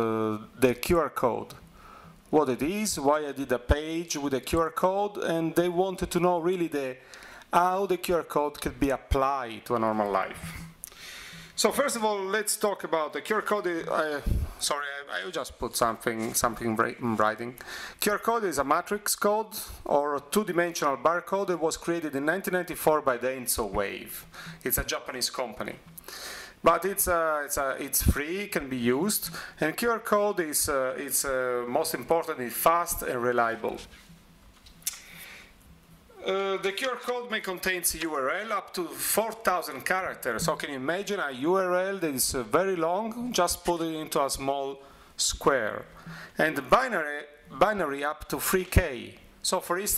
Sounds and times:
Speech: 0.0s - 1.6s, 2.3s - 10.6s, 11.6s - 25.8s, 26.6s - 33.9s, 36.2s - 49.9s.

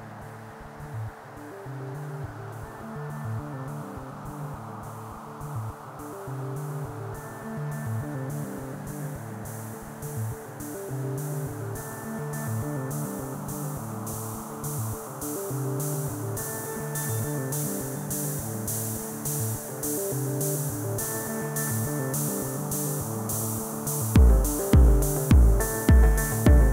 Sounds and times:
Electronica: 0.0s - 26.7s.

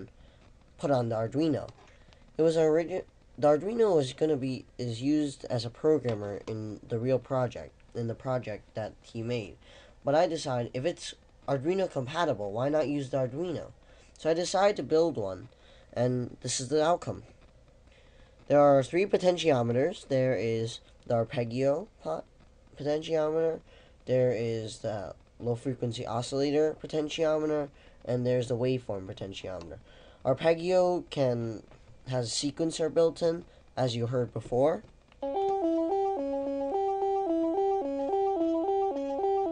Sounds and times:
Speech: 0.8s - 1.8s, 2.4s - 17.3s, 18.5s - 34.9s.

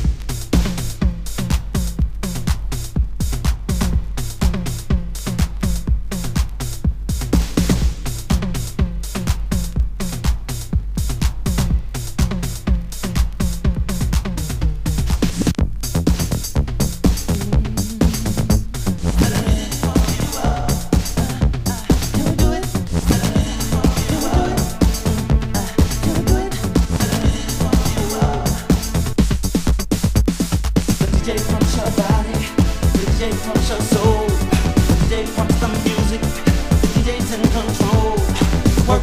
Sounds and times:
Soundtrack music: 17.1s - 29.6s, 31.0s - 39.0s.

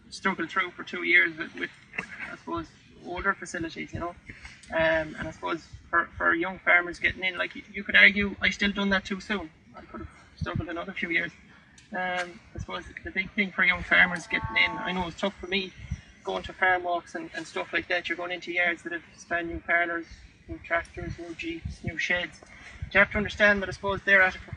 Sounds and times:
Speech: 0.0s - 24.5s.

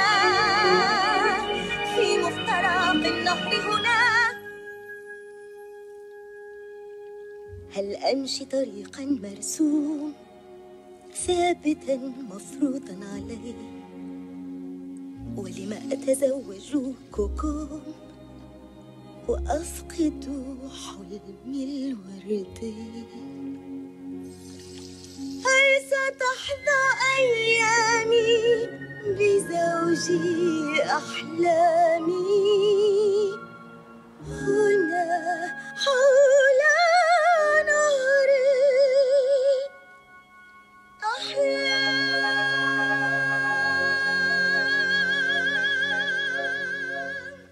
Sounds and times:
Music: 0.0s - 47.5s.

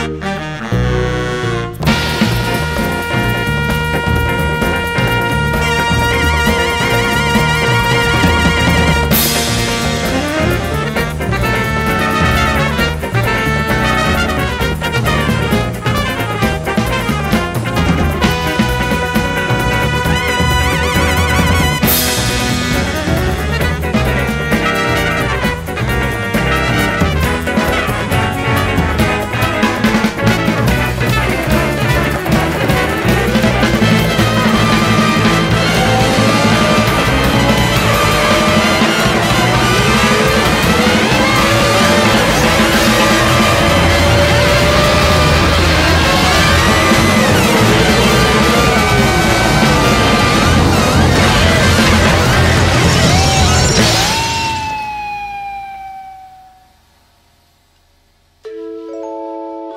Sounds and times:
Music: 0.0s - 57.6s, 58.3s - 59.7s.

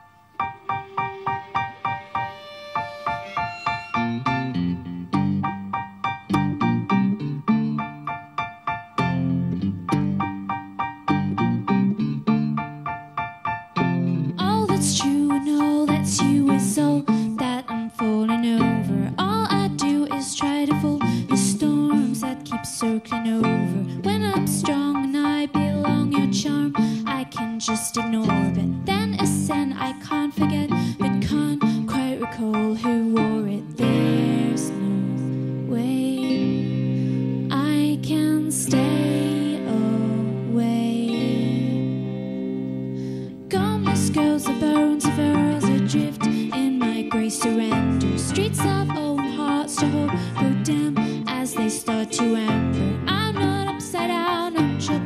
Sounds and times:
Music: 0.0s - 55.0s.

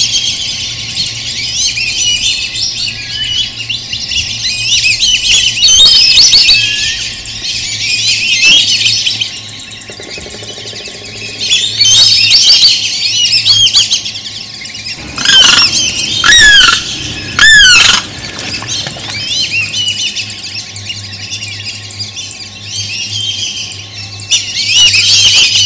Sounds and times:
Outside, rural or natural: 0.0s - 25.6s
Squawk: 14.9s - 20.5s.

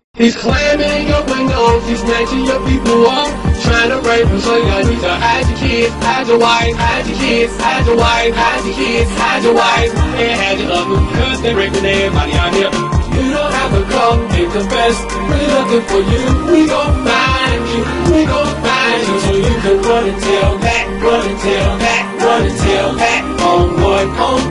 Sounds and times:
Music: 0.2s - 24.5s.

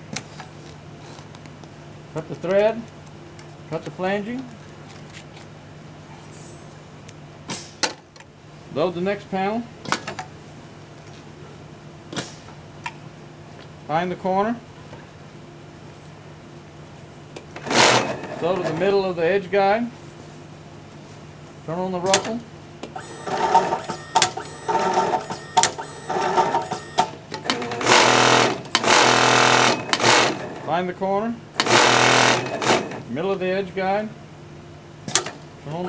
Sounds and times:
Speech: 2.2s - 2.9s, 3.7s - 4.5s, 8.7s - 9.7s, 13.9s - 14.6s, 18.4s - 20.0s, 21.7s - 22.5s, 30.7s - 31.4s, 33.1s - 34.2s, 35.6s - 35.8s.

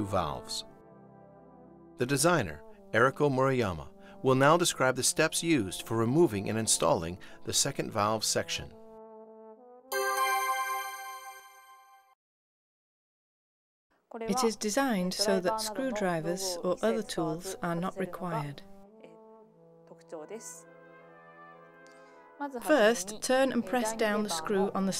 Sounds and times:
Speech: 0.0s - 0.7s, 2.0s - 8.8s, 14.1s - 18.6s, 19.9s - 20.6s, 22.4s - 24.9s.

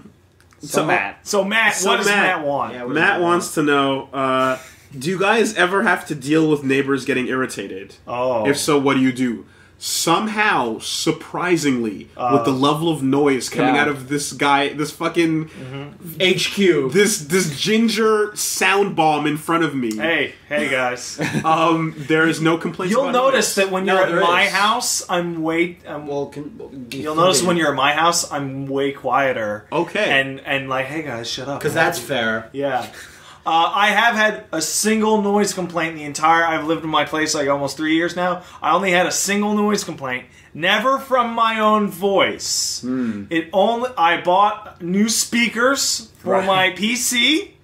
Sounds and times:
Speech: 0.0s - 47.6s.

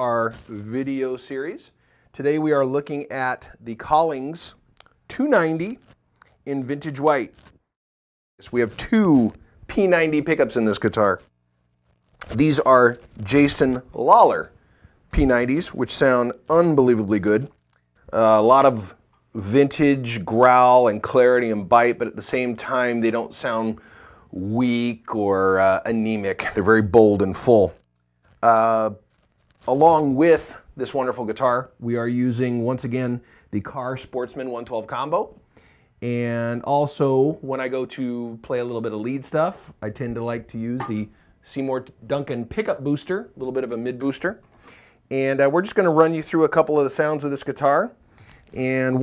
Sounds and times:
Speech: 0.0s - 7.4s, 8.4s - 11.3s, 12.2s - 27.8s, 28.4s - 29.0s, 29.7s - 35.4s, 36.0s - 44.4s, 45.1s - 49.0s.

